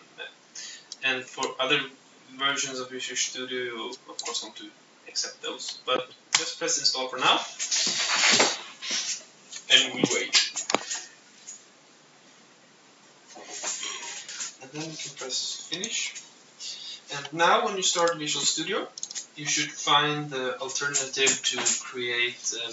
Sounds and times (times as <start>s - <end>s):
Speech: 0.0s - 7.9s, 9.6s - 11.1s, 13.4s - 22.7s
Inside, small room: 0.0s - 22.7s.